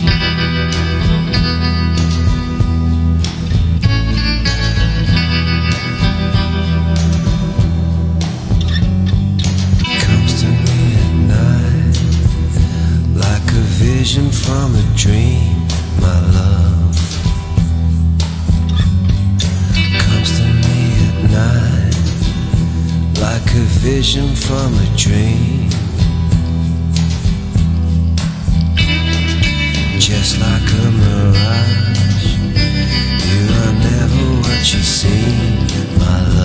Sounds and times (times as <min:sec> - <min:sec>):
Music: 0:00.0 - 0:36.4.